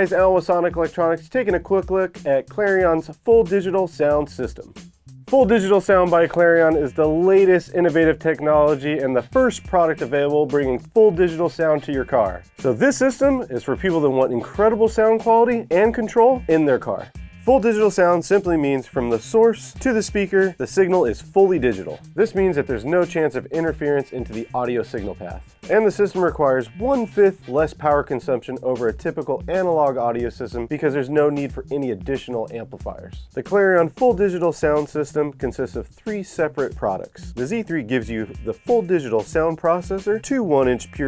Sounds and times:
Speech: 0:00.0 - 0:04.7, 0:05.3 - 0:41.0
Music: 0:00.0 - 0:41.0.

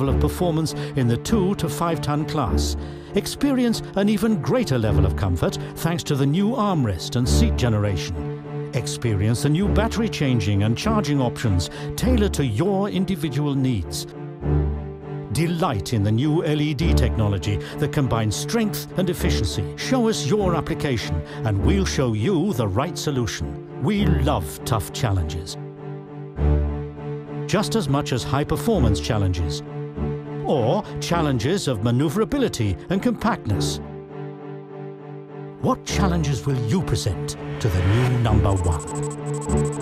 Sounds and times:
Speech: 0:00.0 - 0:08.2, 0:08.8 - 0:14.1, 0:15.3 - 0:25.6, 0:27.5 - 0:29.6, 0:30.4 - 0:33.8, 0:35.6 - 0:38.9
Music: 0:00.0 - 0:39.8.

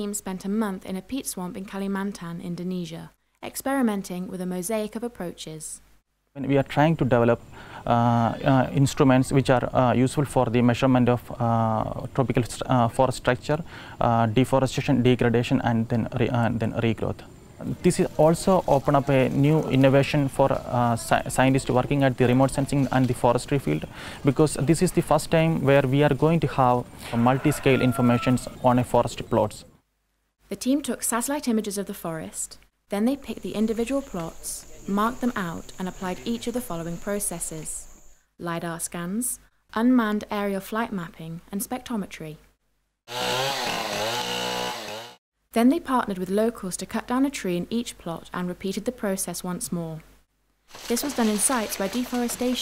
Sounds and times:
Speech: 0:00.0 - 0:05.8, 0:06.4 - 0:29.7, 0:30.5 - 0:37.8, 0:38.4 - 0:42.4, 0:45.6 - 0:50.0, 0:50.9 - 0:52.6
Chainsaw: 0:43.1 - 0:45.2
Power tool: 0:43.1 - 0:45.2.

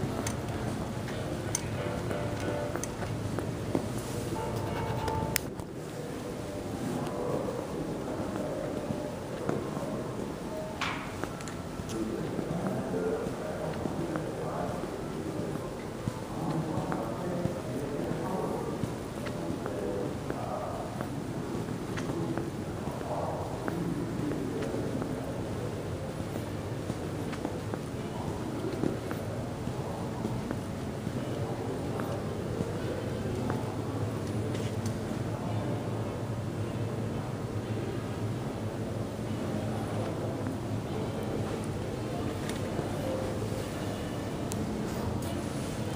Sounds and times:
Speech: 0:00.0 - 0:45.9.

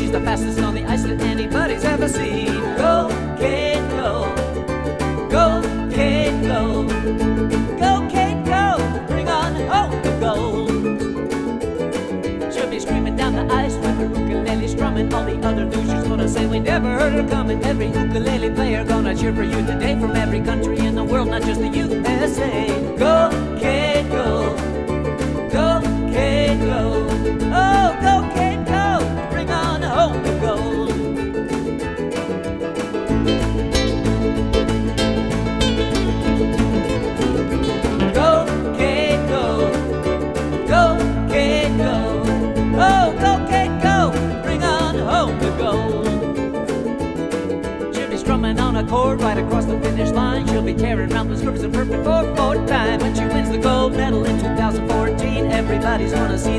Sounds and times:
Ukulele: 0:00.0 - 0:56.5.

